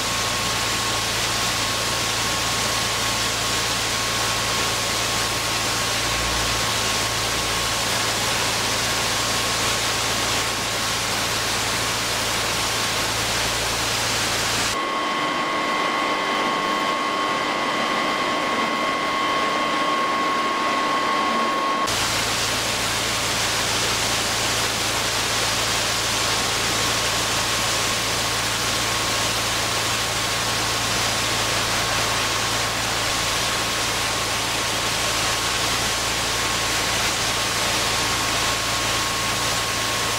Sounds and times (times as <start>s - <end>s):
Pump (liquid): 0.0s - 40.1s.